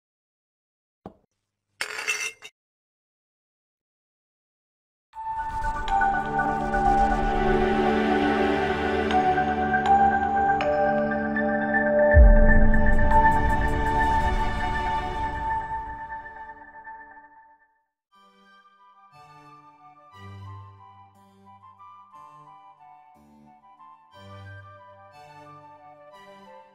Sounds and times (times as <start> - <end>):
Music: 5.2 - 26.7.